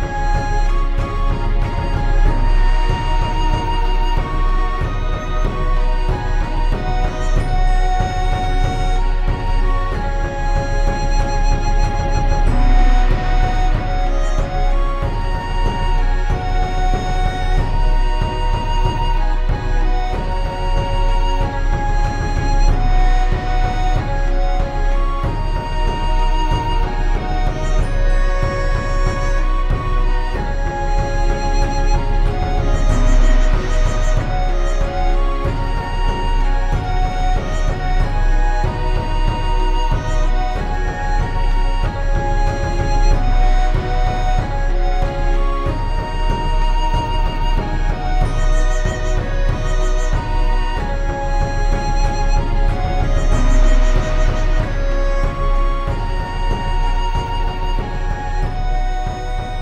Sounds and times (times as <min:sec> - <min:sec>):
Music: 0:00.0 - 0:59.6.